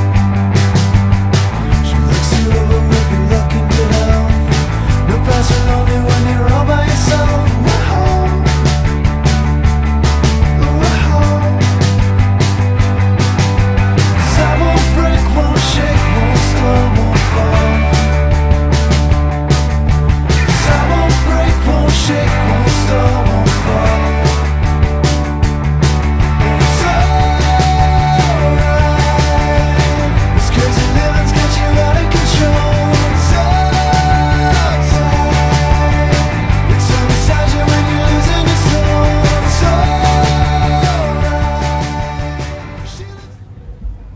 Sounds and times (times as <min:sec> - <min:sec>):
Psychedelic rock: 0:00.0 - 0:43.3
Independent music: 0:00.0 - 0:44.1.